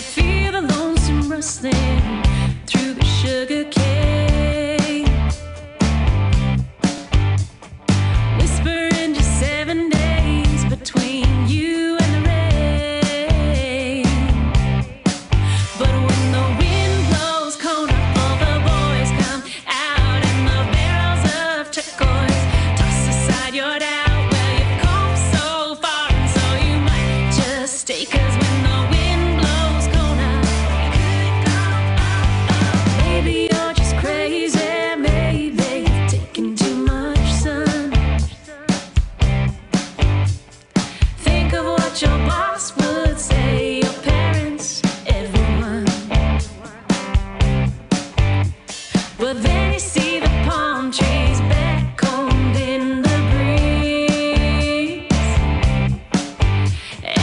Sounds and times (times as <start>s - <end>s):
Music: 0.0s - 57.2s.